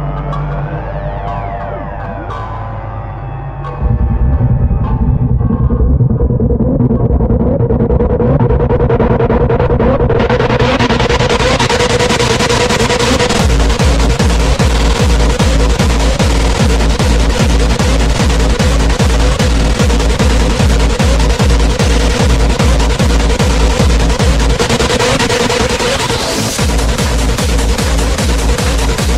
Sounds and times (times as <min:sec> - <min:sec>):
Pop music: 0:10.2 - 0:29.1.